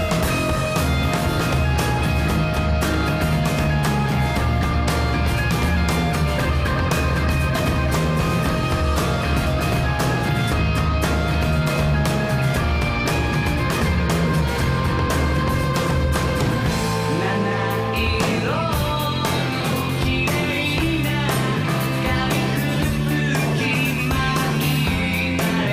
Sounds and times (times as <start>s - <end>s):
Music: 0.0s - 25.7s.